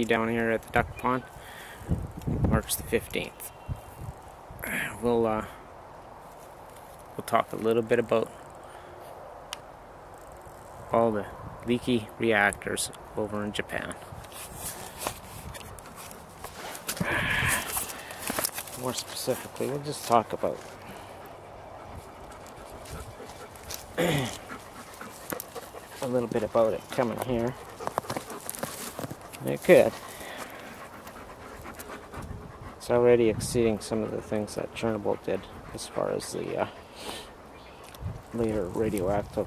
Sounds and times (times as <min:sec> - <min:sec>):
Speech: 0:00.0 - 0:01.3, 0:02.5 - 0:03.5, 0:04.6 - 0:05.6, 0:07.2 - 0:08.3, 0:10.9 - 0:14.0, 0:18.8 - 0:20.7, 0:26.0 - 0:27.6, 0:29.4 - 0:30.0, 0:32.8 - 0:36.8, 0:38.3 - 0:39.4
Animal: 0:18.8 - 0:32.9.